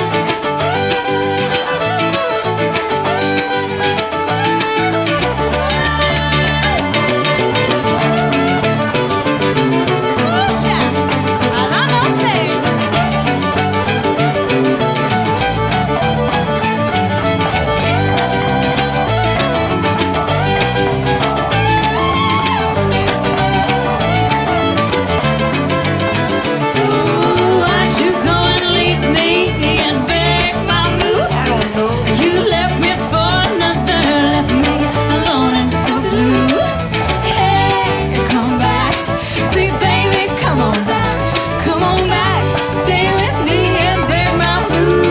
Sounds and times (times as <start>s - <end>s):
Violin, fiddle: 0.0s - 45.1s.